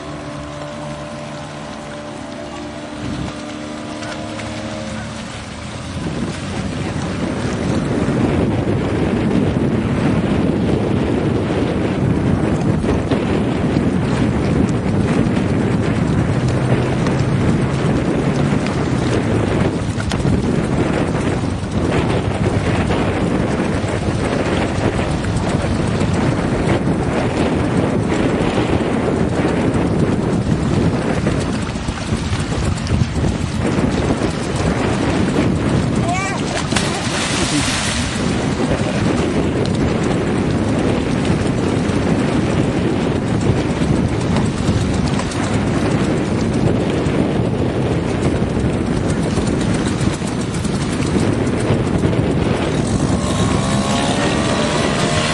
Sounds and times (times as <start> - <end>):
Boat, Water vehicle: 0.0 - 55.3.